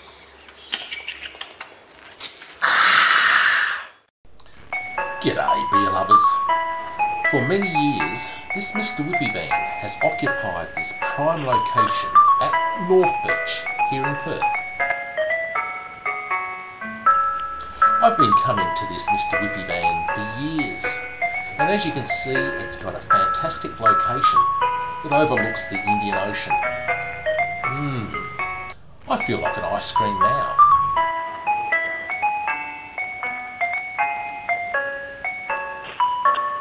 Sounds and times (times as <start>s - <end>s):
Glockenspiel: 4.6s - 36.6s
Marimba, xylophone: 4.7s - 15.6s, 17.1s - 36.6s.